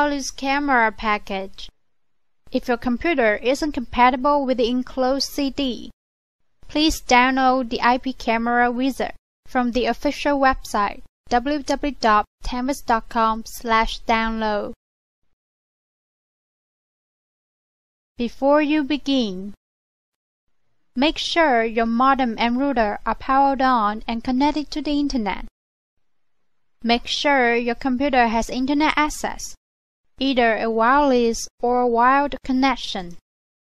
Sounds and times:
Speech: 0.0 - 1.7, 2.6 - 6.0, 6.7 - 14.8, 18.2 - 19.6, 21.0 - 25.5, 26.8 - 29.6, 30.2 - 33.2.

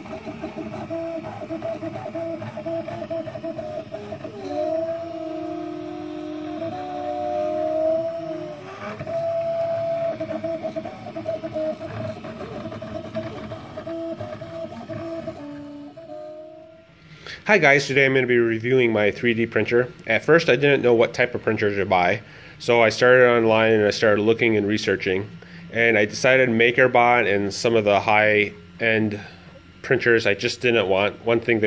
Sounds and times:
Printer: 0.0 - 16.9, 22.8 - 31.6
Speech: 17.5 - 31.6.

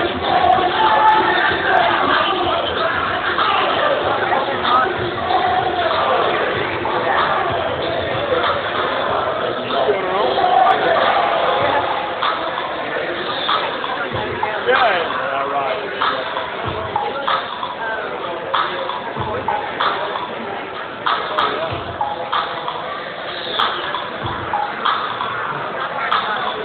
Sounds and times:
Music: 0.0 - 26.6
Speech: 0.0 - 26.6.

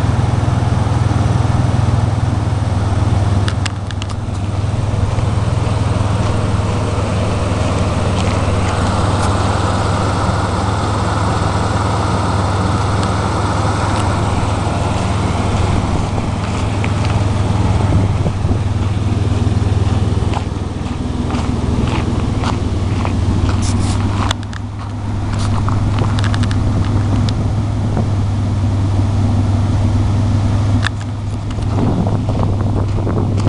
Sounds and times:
Car: 0.0 - 33.4
Idling: 0.0 - 33.4
Medium engine (mid frequency): 0.0 - 33.4.

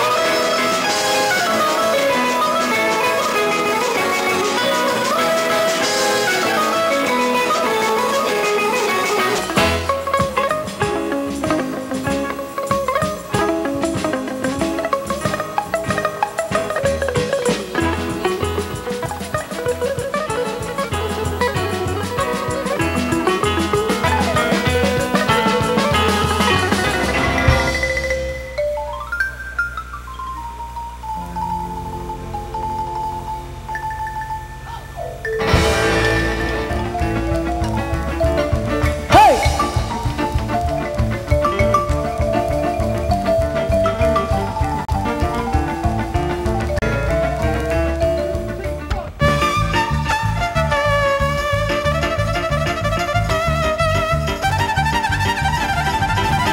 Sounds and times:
Music: 0.0 - 56.5.

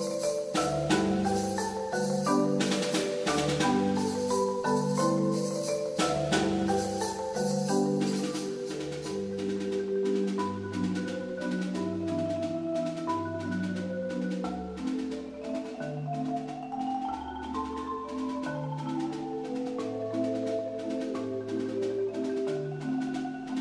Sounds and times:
Marimba, xylophone: 0.0 - 23.6.

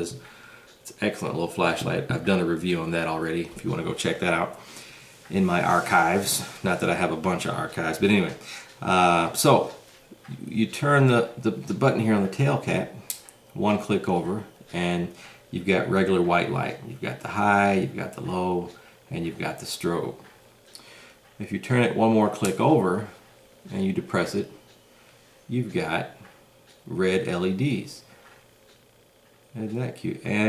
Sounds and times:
Speech: 0.0 - 0.2, 0.9 - 4.6, 5.3 - 13.0, 13.6 - 20.2, 21.4 - 24.6, 25.5 - 26.2, 26.9 - 28.1, 29.6 - 30.4
Inside, small room: 0.0 - 30.4.

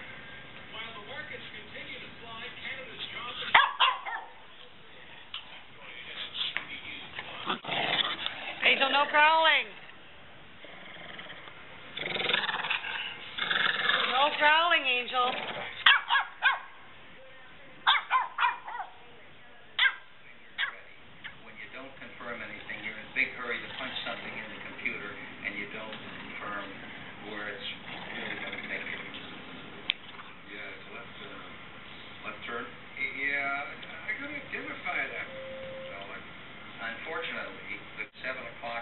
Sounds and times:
Dog: 3.5 - 4.4, 15.4 - 16.8, 17.9 - 19.0, 19.8 - 20.8.

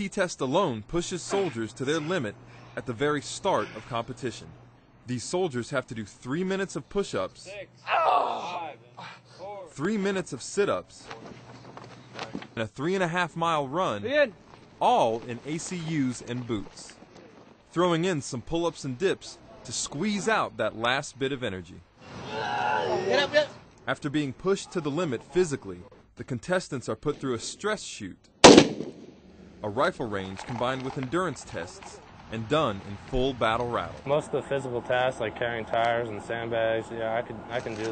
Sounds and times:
Speech: 0.0 - 7.7, 9.4 - 11.2, 12.2 - 17.0, 17.8 - 21.8, 23.0 - 28.2, 29.6 - 37.9.

